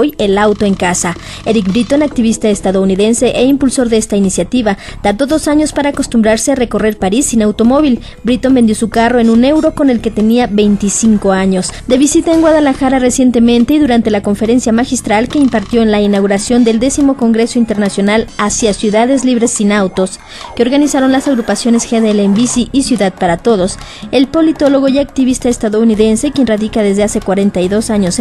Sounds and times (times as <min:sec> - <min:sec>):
Music: 0:00.0 - 0:28.2
Speech: 0:00.0 - 0:28.2.